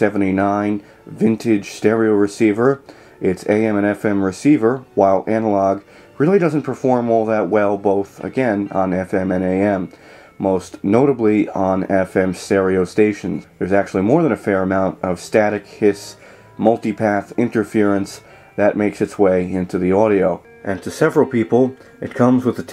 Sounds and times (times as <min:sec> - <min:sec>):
Speech: 0:00.0 - 0:22.7.